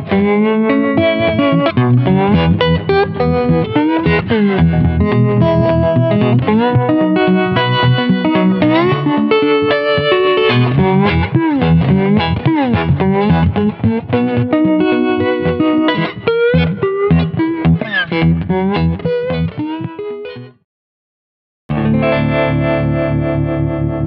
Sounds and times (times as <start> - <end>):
Music: 0.0 - 20.7, 21.7 - 24.0.